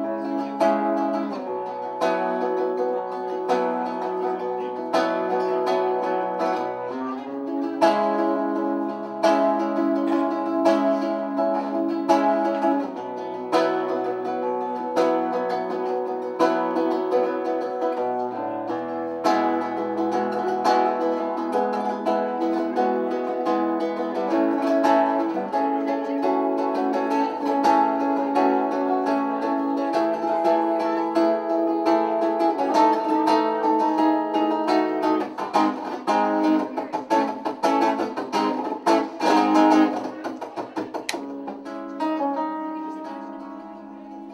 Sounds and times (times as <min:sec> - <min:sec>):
Guitar: 0:00.0 - 0:44.3
Speech: 0:02.8 - 0:15.0, 0:21.4 - 0:34.0, 0:34.8 - 0:44.3.